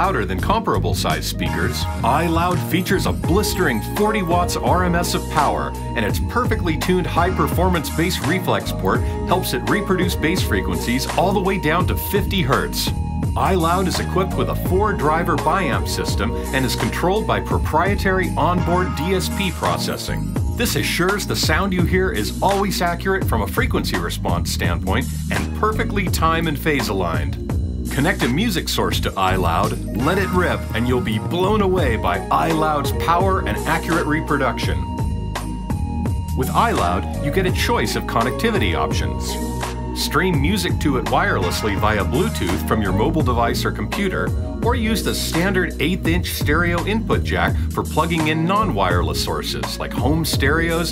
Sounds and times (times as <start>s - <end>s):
Speech: 0.0s - 34.9s, 36.4s - 39.4s, 40.0s - 50.9s
Music: 0.0s - 50.9s.